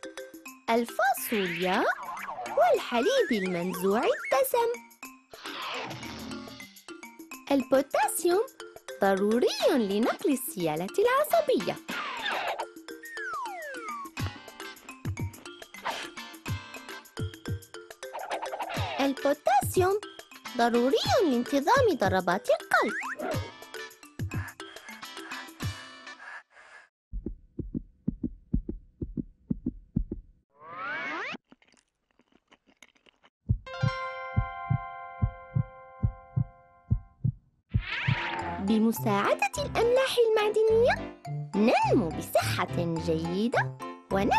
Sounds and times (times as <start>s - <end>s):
Music for children: 0.0s - 26.5s, 33.7s - 36.9s, 38.6s - 44.3s.